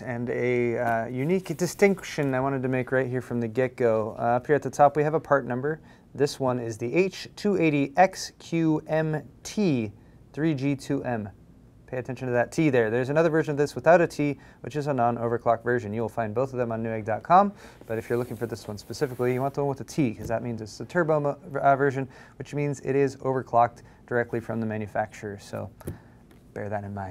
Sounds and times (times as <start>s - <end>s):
Speech: 0.0s - 27.1s.